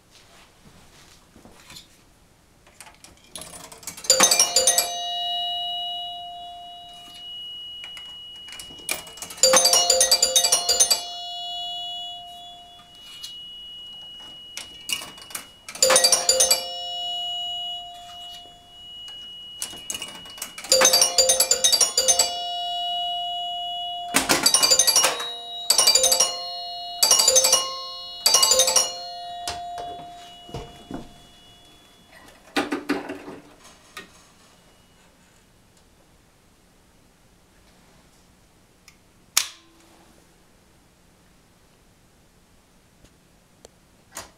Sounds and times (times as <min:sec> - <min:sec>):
Music: 0:04.1 - 0:32.3
Doorbell: 0:04.1 - 0:35.4.